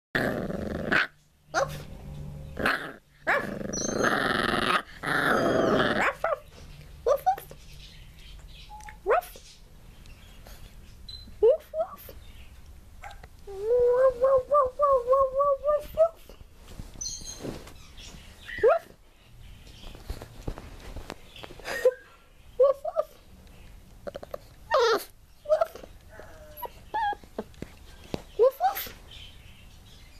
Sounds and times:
Growling: 0.2s - 1.1s, 2.6s - 6.2s
Inside, small room: 0.2s - 30.1s
Chirp, tweet: 7.5s - 11.4s, 17.0s - 20.1s, 27.9s - 30.1s.

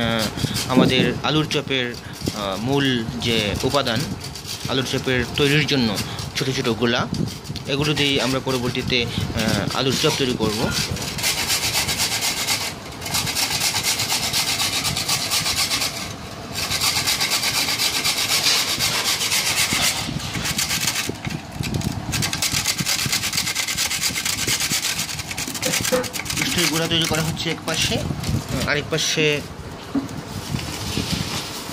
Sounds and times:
Filing (rasp): 0.0s - 28.0s
Rub: 0.0s - 28.5s, 30.3s - 31.7s.

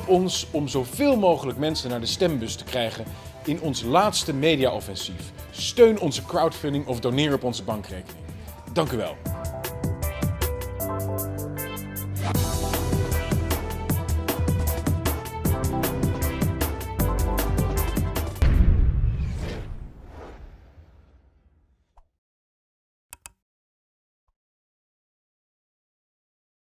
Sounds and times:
Music: 0.0s - 19.0s.

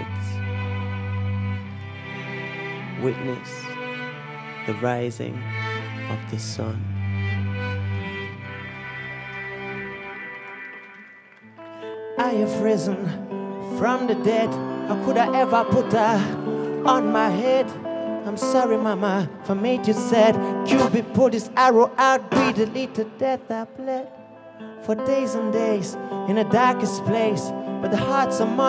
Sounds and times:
Music: 0.0s - 28.6s.

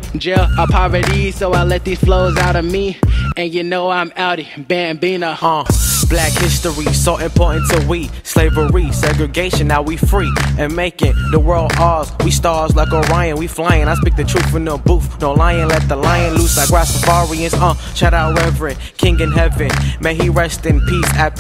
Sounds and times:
Music: 0.0s - 3.4s, 5.6s - 21.4s
Rapping: 0.0s - 21.4s.

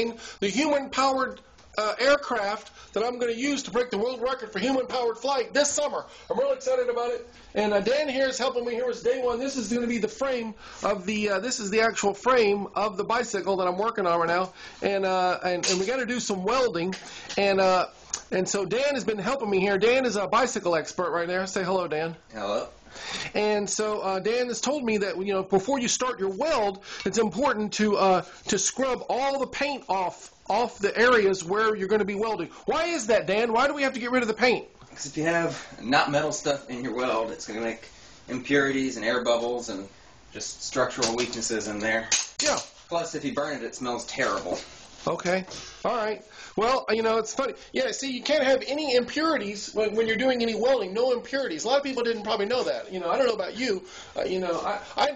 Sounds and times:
Speech: 0.0s - 55.1s.

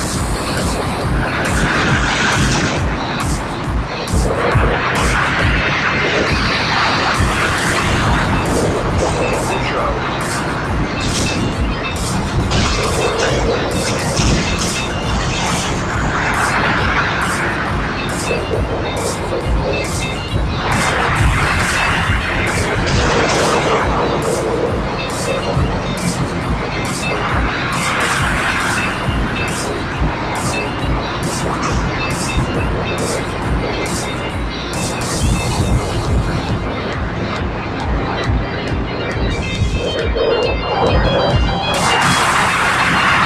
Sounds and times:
Music: 0.0s - 43.2s.

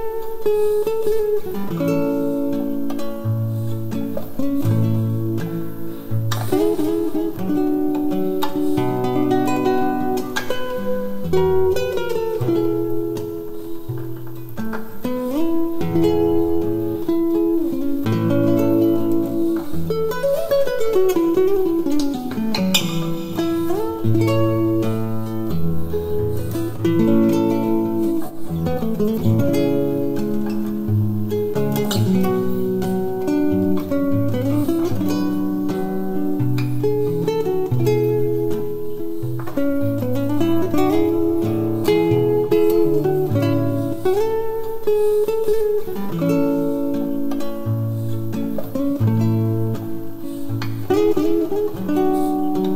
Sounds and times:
Acoustic guitar: 0.0s - 52.7s
Strum: 0.0s - 52.7s.

